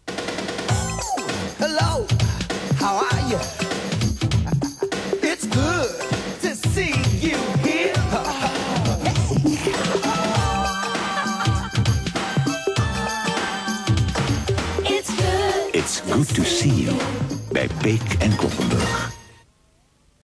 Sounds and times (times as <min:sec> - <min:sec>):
Music: 0:00.0 - 0:19.5
Speech: 0:15.8 - 0:18.9.